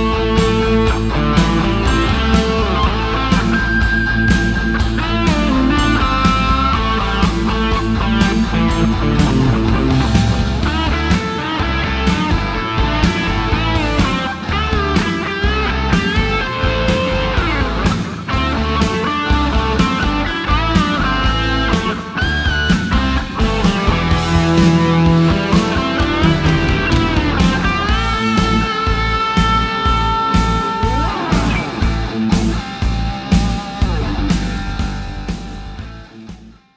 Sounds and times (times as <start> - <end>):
Bass guitar: 0.0 - 36.7
Electric guitar: 0.0 - 36.7.